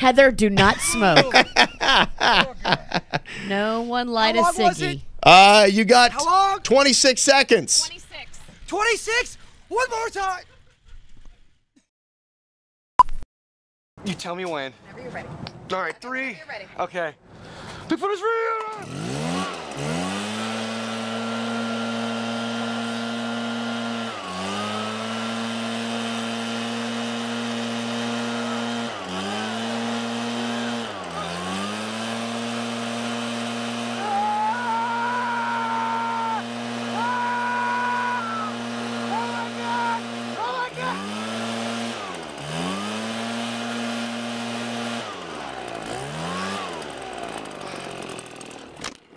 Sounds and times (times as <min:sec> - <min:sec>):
Speech: 0:00.0 - 0:01.5, 0:02.3 - 0:08.1, 0:08.7 - 0:10.4, 0:14.0 - 0:17.2
Outside, urban or manmade: 0:00.0 - 0:11.9, 0:14.0 - 0:49.1.